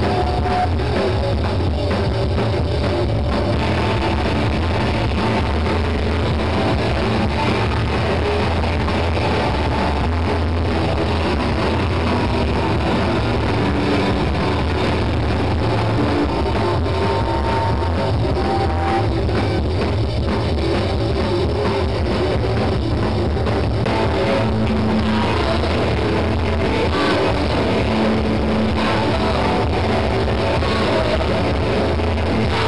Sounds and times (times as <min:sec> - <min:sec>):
Electric guitar: 0:00.0 - 0:32.6.